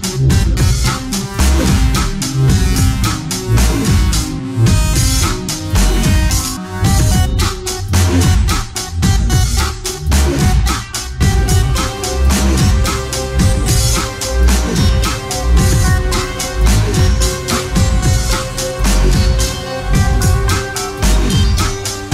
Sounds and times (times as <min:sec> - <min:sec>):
Dubstep: 0:00.0 - 0:22.1.